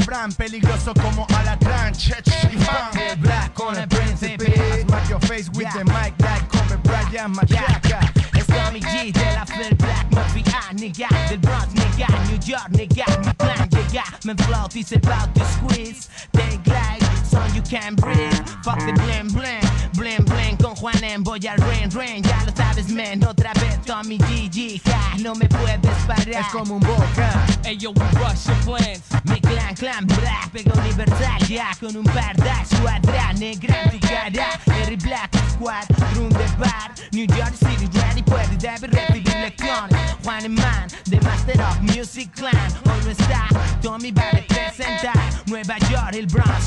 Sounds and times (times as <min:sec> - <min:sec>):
Music: 0:00.0 - 0:46.6.